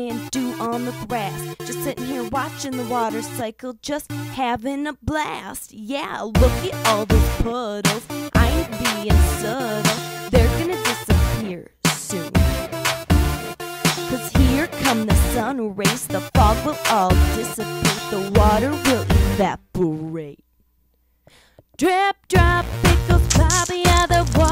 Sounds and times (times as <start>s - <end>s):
Music: 0.0s - 4.6s, 6.3s - 20.4s, 21.8s - 24.5s
Speech: 0.0s - 12.6s, 13.3s - 20.4s.